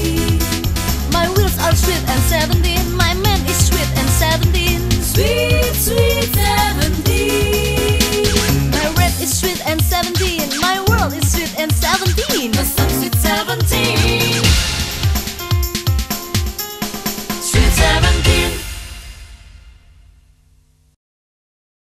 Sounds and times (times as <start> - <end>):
Music: 0.0 - 20.3.